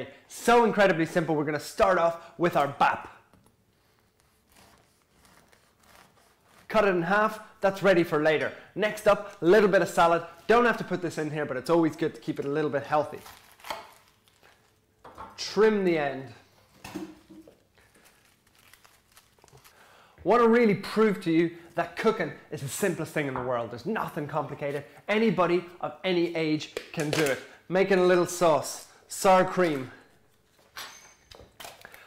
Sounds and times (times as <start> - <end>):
Speech: 0.0 - 3.2, 6.7 - 13.2, 15.4 - 16.4, 20.2 - 30.0.